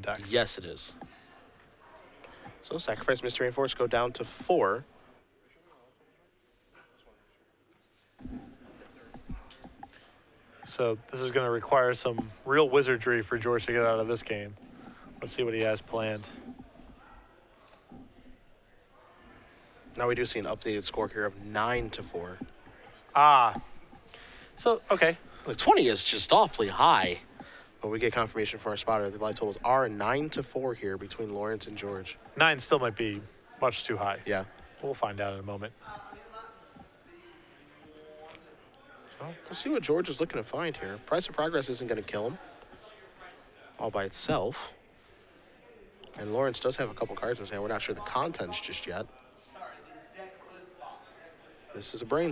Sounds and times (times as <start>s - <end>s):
Speech: 0.0s - 1.2s, 1.8s - 4.9s, 10.6s - 14.6s, 15.2s - 16.4s, 19.9s - 23.8s, 24.6s - 44.8s, 45.6s - 52.3s.